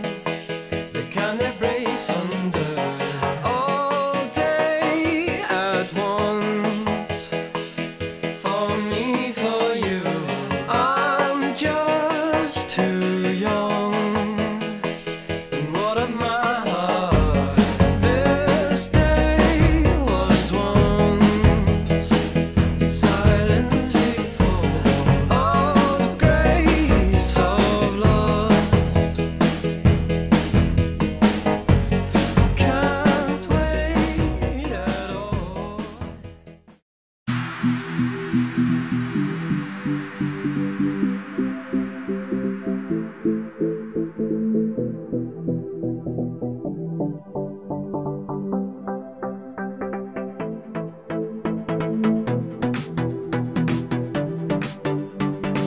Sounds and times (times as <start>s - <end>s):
Independent music: 0.0s - 36.7s, 37.3s - 55.6s.